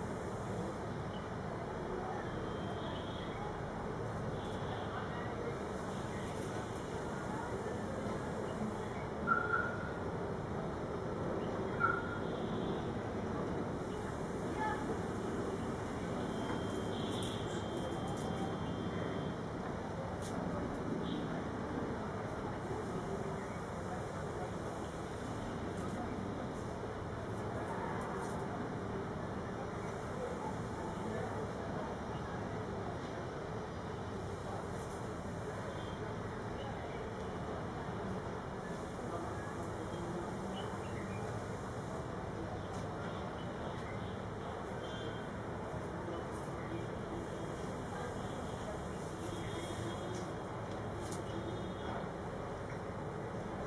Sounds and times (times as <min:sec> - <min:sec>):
Speech: 0:00.4 - 0:53.6.